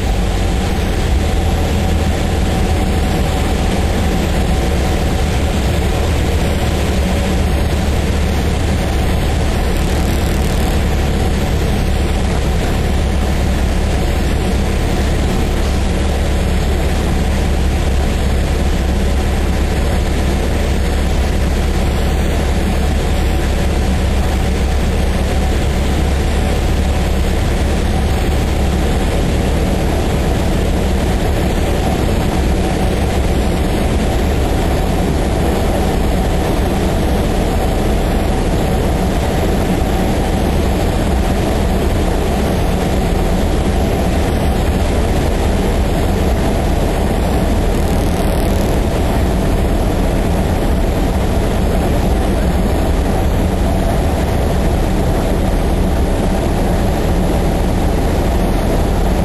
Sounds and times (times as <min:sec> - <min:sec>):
Vehicle: 0:00.0 - 0:59.2.